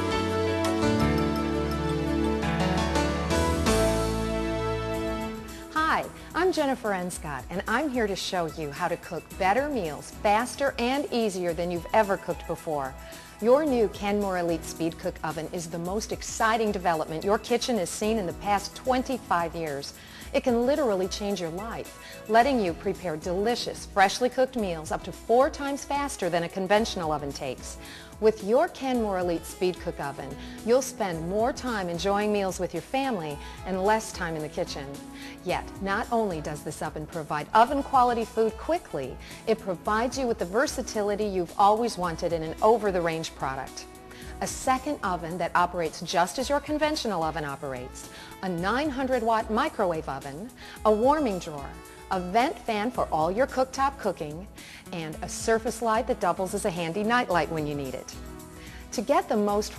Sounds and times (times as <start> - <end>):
Music: 0.0 - 59.7
Speech: 5.8 - 43.8, 44.4 - 58.1, 58.9 - 59.7.